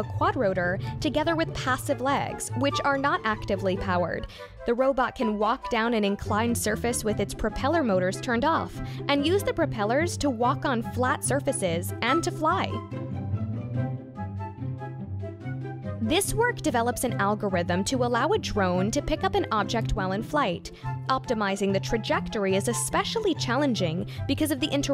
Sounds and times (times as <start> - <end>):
Speech: 0.0 - 12.8, 16.0 - 24.9
Music: 0.0 - 24.9.